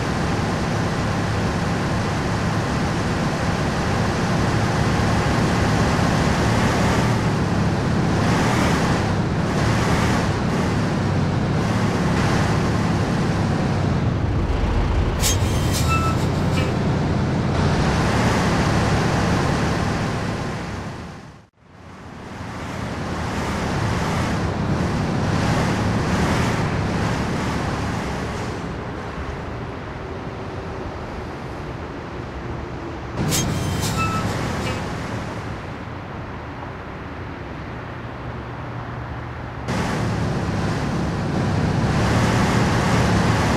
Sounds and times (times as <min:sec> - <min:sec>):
Car: 0:00.0 - 0:43.5.